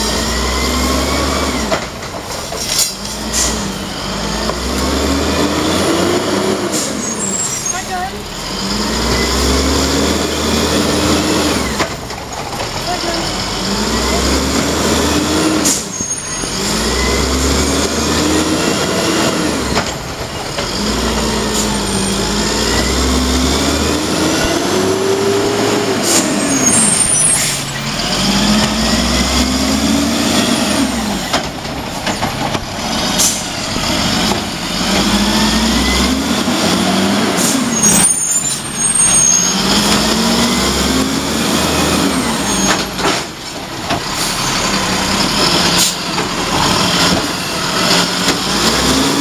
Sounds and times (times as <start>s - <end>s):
Truck: 0.0s - 49.2s.